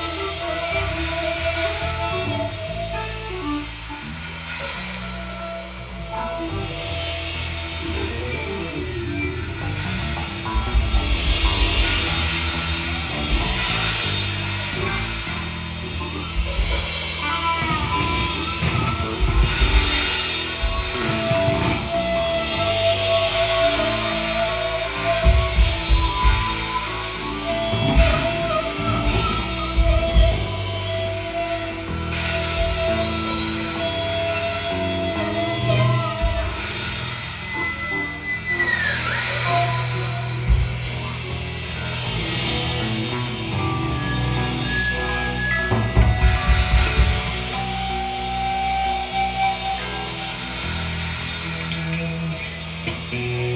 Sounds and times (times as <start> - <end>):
Music: 0.0 - 53.5.